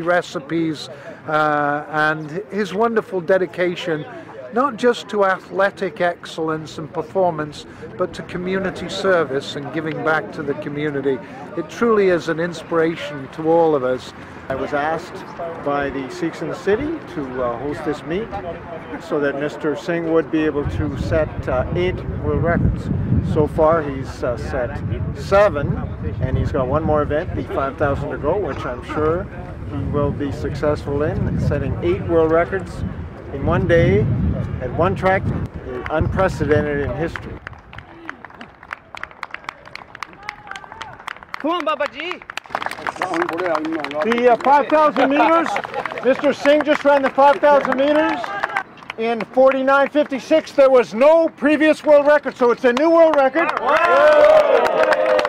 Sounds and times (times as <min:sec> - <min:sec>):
Speech: 0:00.0 - 0:37.4, 0:42.8 - 0:53.6
Outside, urban or manmade: 0:00.0 - 0:55.2.